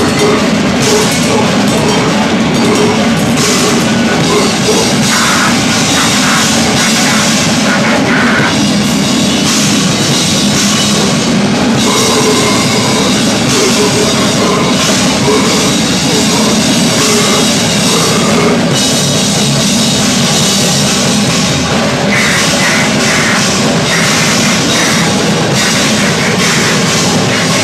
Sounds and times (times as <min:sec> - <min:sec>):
Music: 0:00.0 - 0:27.6.